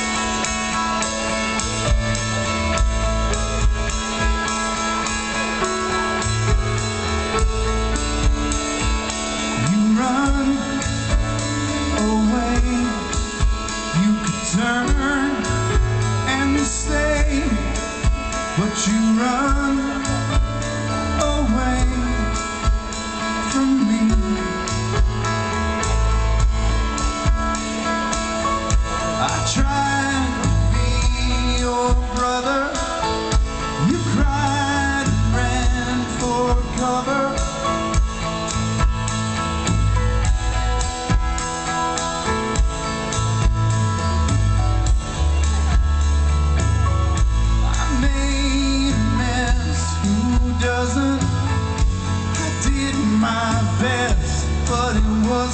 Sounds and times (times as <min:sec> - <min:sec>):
Music: 0:00.0 - 0:55.5.